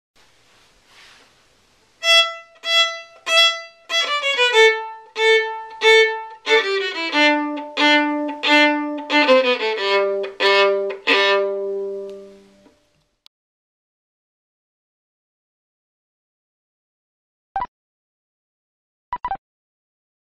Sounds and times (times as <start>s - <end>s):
Violin, fiddle: 2.0s - 12.6s.